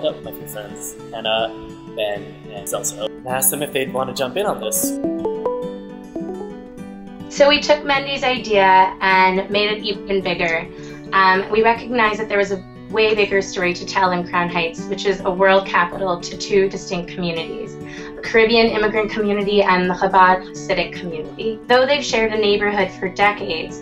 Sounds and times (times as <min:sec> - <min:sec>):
Speech: 0:00.0 - 0:05.0, 0:07.4 - 0:17.6, 0:18.2 - 0:23.7
Music: 0:00.0 - 0:23.8.